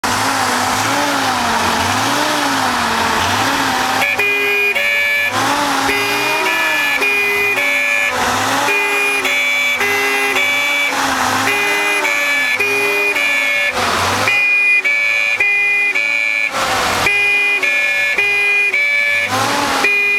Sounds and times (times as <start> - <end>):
Accelerating, revving, vroom: 0.0 - 20.1
Ambulance (siren): 0.0 - 20.1.